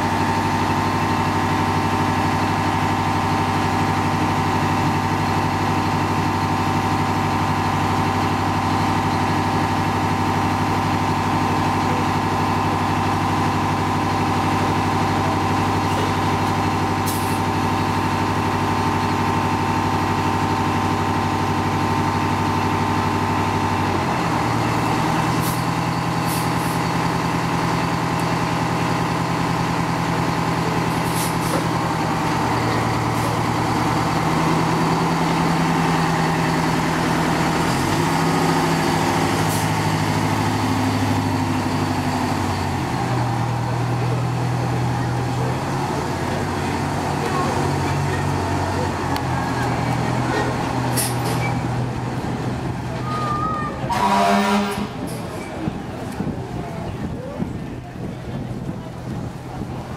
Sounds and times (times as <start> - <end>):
Motor vehicle (road): 0.0 - 59.9.